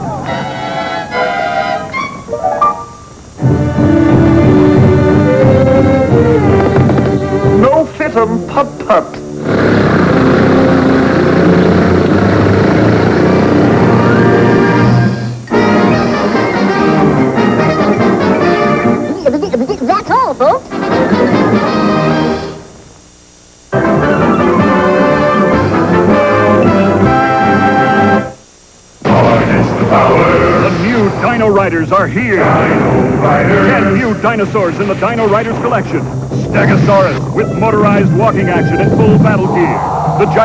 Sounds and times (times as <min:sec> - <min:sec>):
Music: 0:00.0 - 0:19.5, 0:20.4 - 0:22.8, 0:23.7 - 0:28.4, 0:29.0 - 0:40.4
Speech: 0:33.5 - 0:40.4.